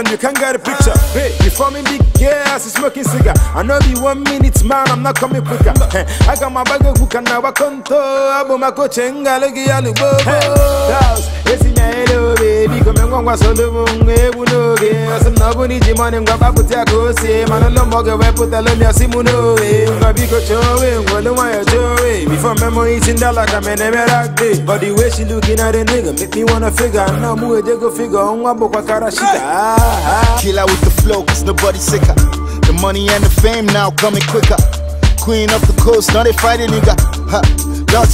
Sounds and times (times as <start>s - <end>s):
Reggae: 0.0s - 38.1s.